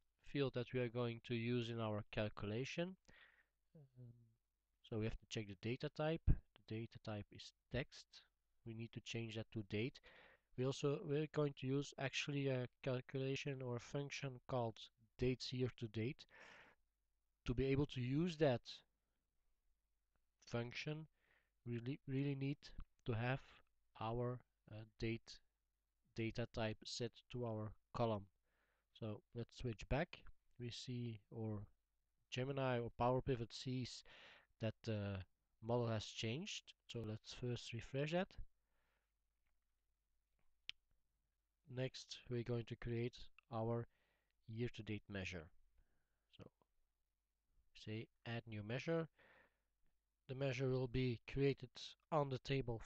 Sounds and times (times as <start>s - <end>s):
Speech: 0.2s - 3.0s, 3.8s - 10.0s, 10.6s - 16.3s, 17.4s - 18.9s, 20.4s - 25.5s, 26.2s - 38.5s, 41.7s - 43.9s, 44.5s - 45.6s, 46.3s - 46.6s, 47.8s - 49.1s, 50.3s - 52.8s.